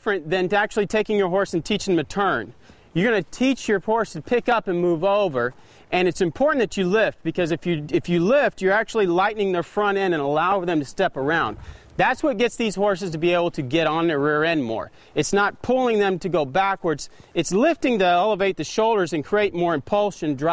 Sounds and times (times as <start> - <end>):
Speech: 0.0 - 20.5.